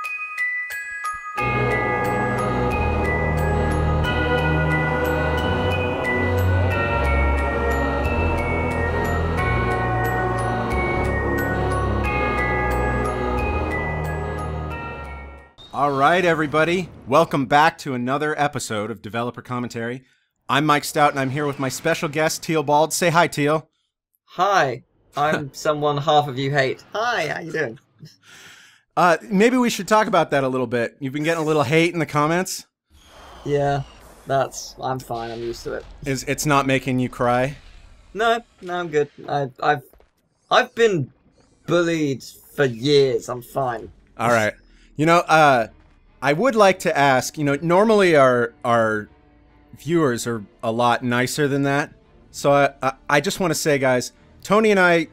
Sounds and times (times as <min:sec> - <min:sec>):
Speech: 0:15.8 - 0:23.6, 0:24.3 - 0:27.8, 0:29.0 - 0:32.6, 0:33.5 - 0:37.6, 0:38.2 - 0:39.9, 0:40.5 - 0:41.1, 0:41.7 - 0:49.1, 0:49.8 - 0:55.1.